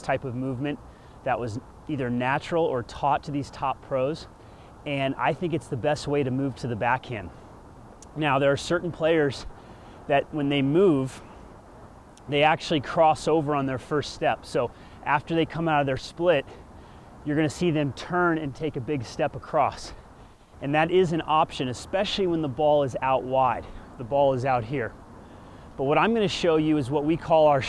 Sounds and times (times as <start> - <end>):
Speech: 0.0 - 7.3, 8.0 - 9.5, 10.1 - 11.3, 12.2 - 16.6, 17.2 - 20.0, 20.6 - 25.0, 25.8 - 27.6.